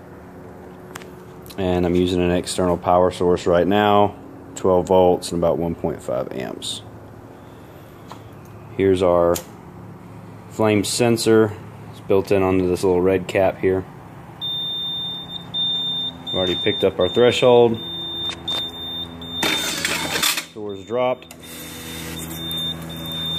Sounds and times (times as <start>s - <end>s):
Speech: 1.5s - 6.9s, 8.8s - 9.5s, 10.5s - 13.9s, 16.4s - 17.8s, 20.6s - 21.3s.